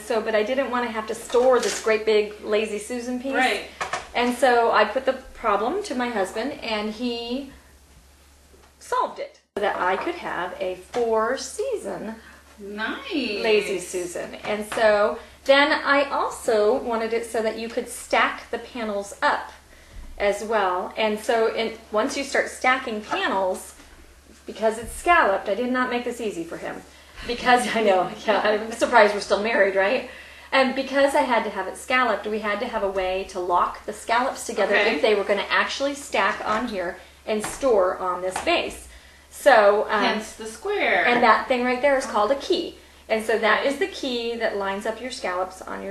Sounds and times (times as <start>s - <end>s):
Speech: 0.0s - 7.6s, 8.8s - 19.6s, 20.2s - 23.8s, 24.4s - 45.9s.